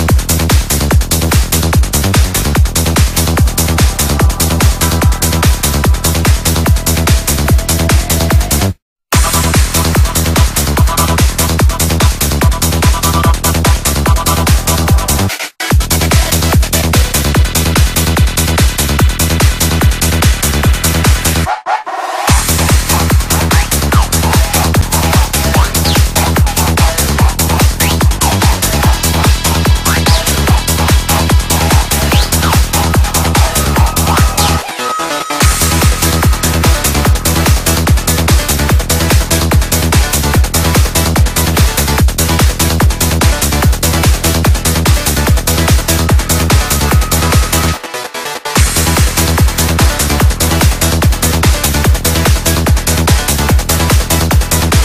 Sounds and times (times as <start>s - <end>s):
Dubstep: 0.0s - 54.8s.